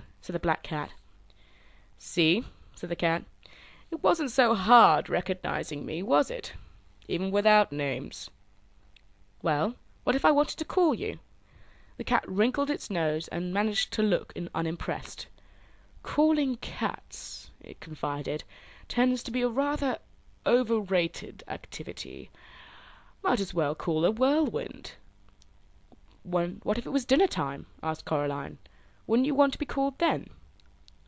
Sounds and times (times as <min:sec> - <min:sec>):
Speech: 0:00.0 - 0:01.0, 0:02.0 - 0:03.3, 0:03.9 - 0:08.4, 0:09.4 - 0:11.2, 0:12.0 - 0:15.3, 0:16.0 - 0:22.3, 0:23.2 - 0:25.0, 0:26.2 - 0:30.4.